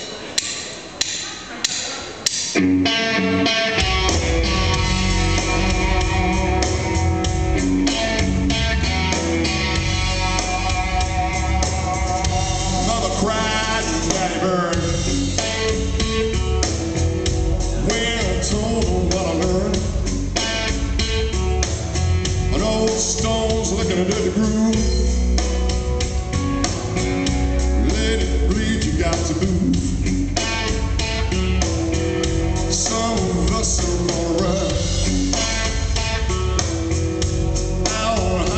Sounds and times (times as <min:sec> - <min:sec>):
Music: 0:00.0 - 0:38.5.